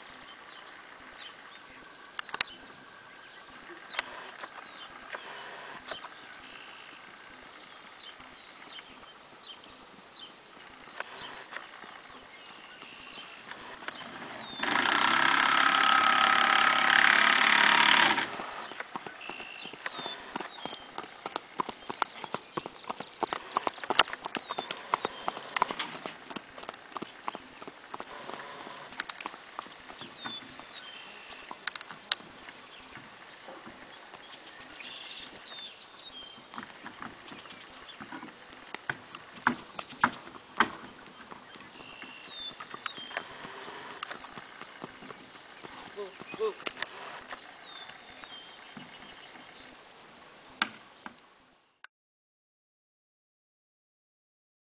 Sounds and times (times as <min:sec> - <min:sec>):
Clip-clop: 0:00.0 - 0:49.9.